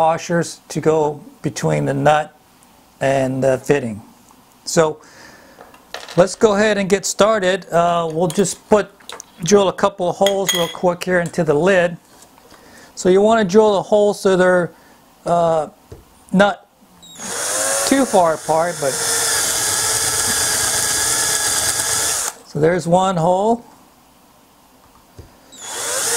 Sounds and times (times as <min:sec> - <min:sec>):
Drill: 0:17.0 - 0:22.4, 0:25.5 - 0:26.1.